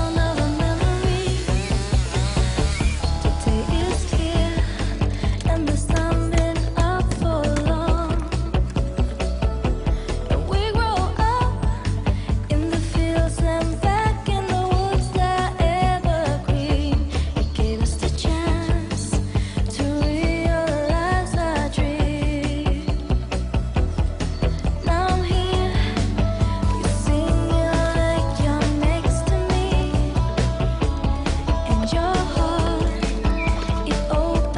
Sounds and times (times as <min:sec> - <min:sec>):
Chainsaw: 0:00.0 - 0:06.6
Music: 0:00.0 - 0:34.5.